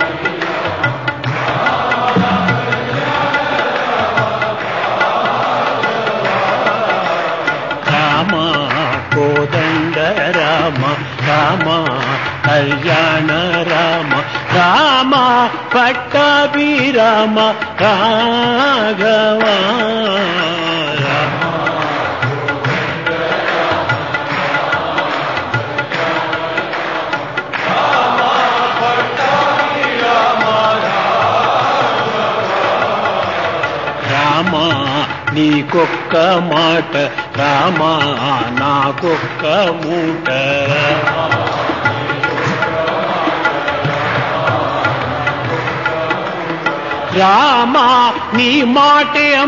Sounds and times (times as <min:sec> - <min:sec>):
Choir: 0:00.0 - 0:49.4
Male singing: 0:00.0 - 0:49.4.